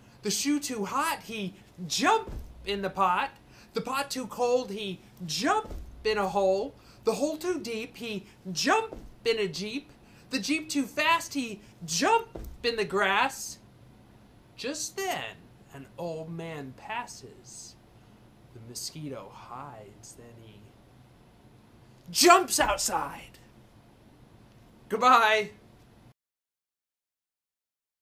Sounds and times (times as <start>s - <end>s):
Speech: 0.2s - 13.6s, 14.6s - 17.8s, 18.5s - 20.8s, 22.1s - 23.5s, 24.9s - 25.6s.